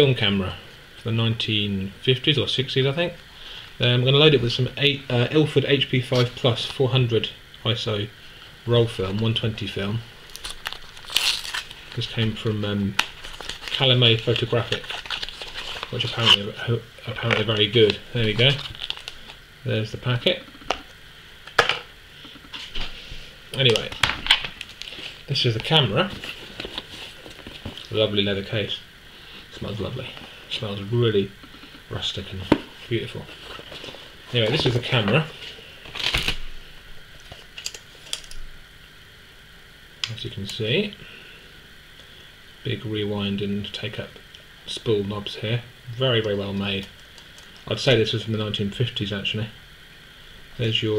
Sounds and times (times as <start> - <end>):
Speech: 0.0 - 3.2, 3.8 - 10.1, 12.0 - 13.0, 13.8 - 14.9, 15.9 - 18.7, 19.6 - 20.5, 23.6 - 24.0, 25.3 - 26.2, 27.9 - 28.8, 29.5 - 33.4, 34.3 - 35.4, 40.0 - 41.0, 42.6 - 46.9, 47.6 - 49.6, 50.6 - 50.9.